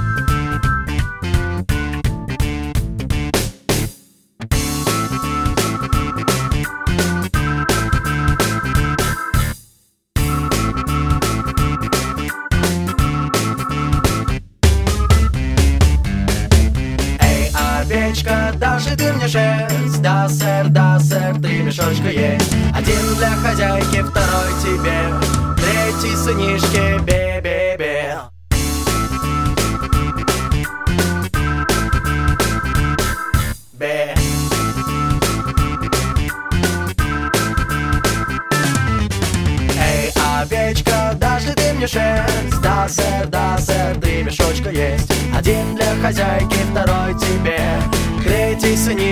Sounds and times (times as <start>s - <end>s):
Music: 0.0s - 49.1s.